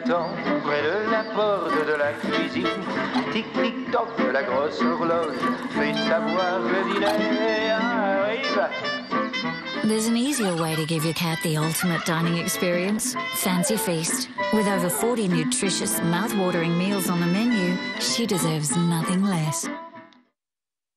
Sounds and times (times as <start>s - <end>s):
Music: 0.0s - 20.3s
Speech: 9.9s - 19.7s.